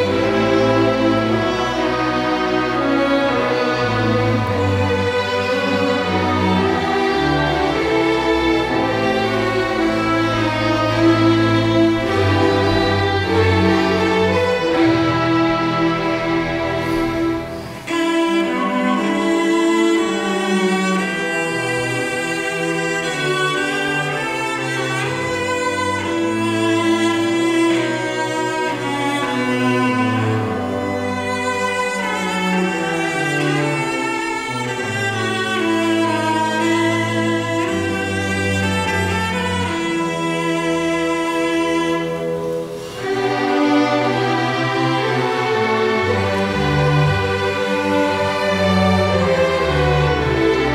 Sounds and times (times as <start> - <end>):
Cello: 0.0 - 50.7
Classical music: 0.0 - 50.7
Orchestra: 0.0 - 50.7
String section: 0.0 - 50.7
Violin, fiddle: 0.0 - 50.7.